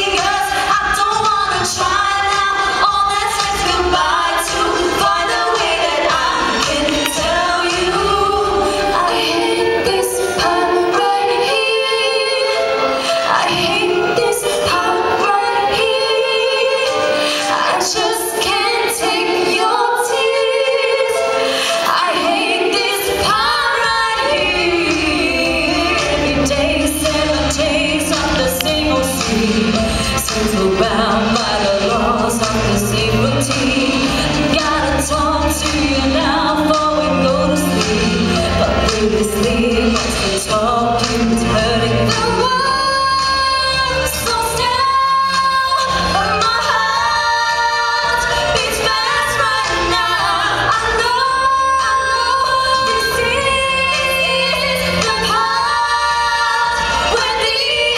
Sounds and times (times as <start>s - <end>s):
Female singing: 0.0s - 12.7s, 13.3s - 57.9s
Music: 0.0s - 57.9s.